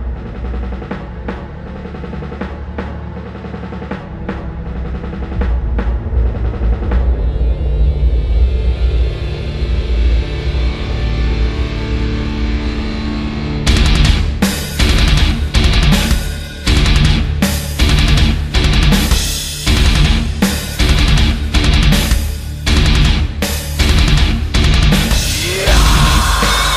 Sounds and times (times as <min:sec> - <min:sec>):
Music: 0:00.0 - 0:26.7.